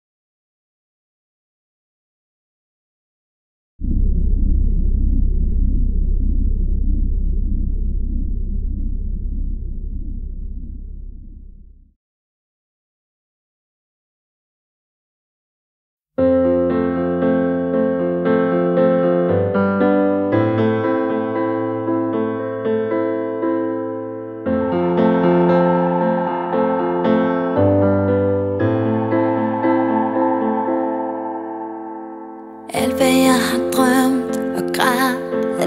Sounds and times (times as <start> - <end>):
Music: 16.2 - 35.6.